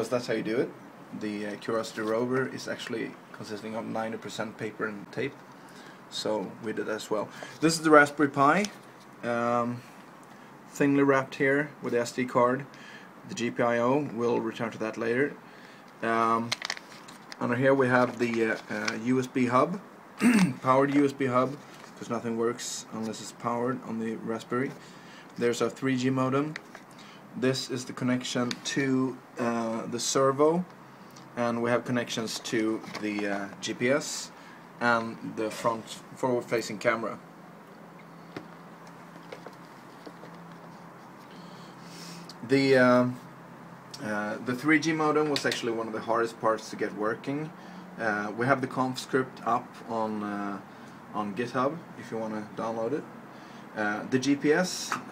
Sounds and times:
Speech: 0.0s - 5.4s, 6.1s - 9.9s, 10.7s - 15.4s, 16.0s - 16.6s, 17.4s - 24.8s, 25.4s - 26.6s, 27.4s - 30.7s, 31.4s - 37.2s, 42.4s - 43.3s, 44.0s - 53.1s, 53.8s - 55.1s.

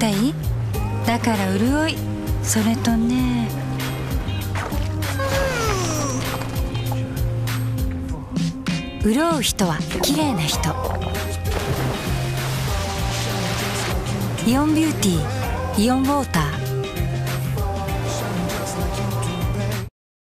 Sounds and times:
Speech: 0.0s - 0.4s, 1.1s - 3.6s, 9.0s - 11.0s, 14.4s - 16.6s
Music: 0.0s - 19.9s.

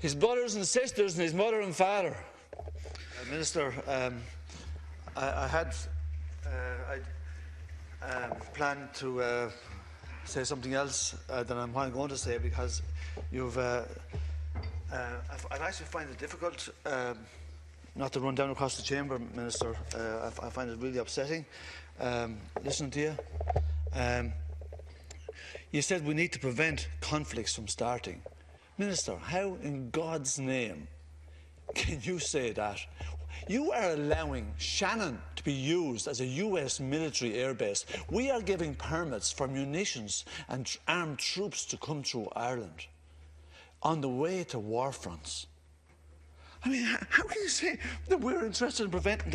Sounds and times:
Male speech, man speaking: 0.0s - 2.4s, 3.2s - 4.4s, 5.1s - 7.2s, 8.0s - 14.1s, 14.9s - 17.4s, 18.0s - 23.3s, 23.9s - 24.4s, 25.7s - 30.9s, 31.7s - 43.0s, 43.8s - 45.6s, 46.6s - 49.3s
Narration, monologue: 0.0s - 49.3s.

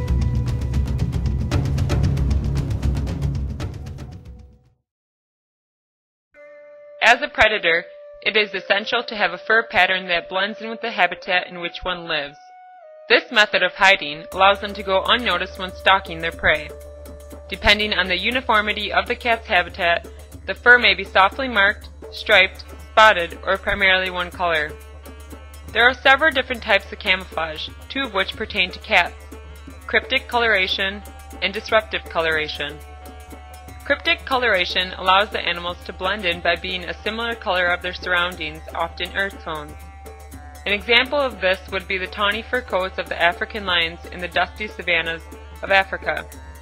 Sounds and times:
Music: 0.0s - 4.9s, 6.4s - 46.6s
Speech: 7.0s - 12.4s, 13.1s - 16.7s, 17.5s - 24.8s, 25.8s - 29.2s, 29.9s - 32.8s, 33.9s - 39.8s, 40.7s - 46.3s.

